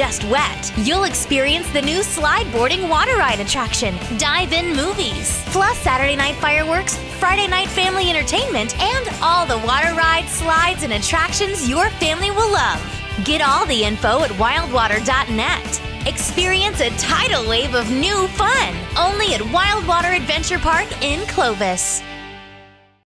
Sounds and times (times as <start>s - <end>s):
Speech: 0.0s - 22.0s
Music: 0.0s - 23.0s.